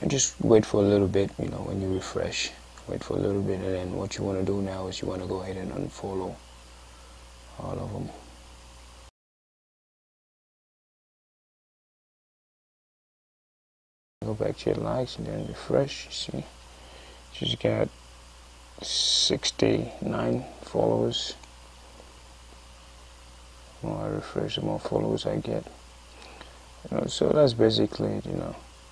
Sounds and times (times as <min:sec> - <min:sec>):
Speech: 0:00.0 - 0:06.4, 0:07.5 - 0:08.2, 0:14.2 - 0:16.5, 0:17.4 - 0:17.9, 0:18.8 - 0:21.4, 0:23.8 - 0:25.8, 0:26.8 - 0:28.7
Inside, small room: 0:00.0 - 0:09.1, 0:14.2 - 0:28.9.